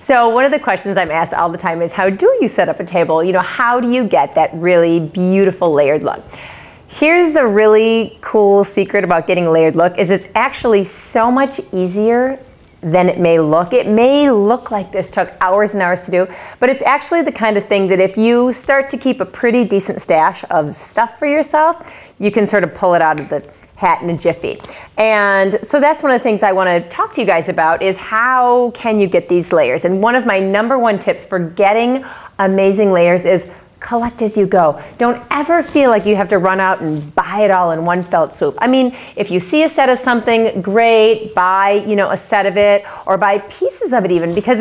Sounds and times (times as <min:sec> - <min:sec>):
Speech: 0:00.0 - 0:06.3, 0:06.9 - 0:44.6.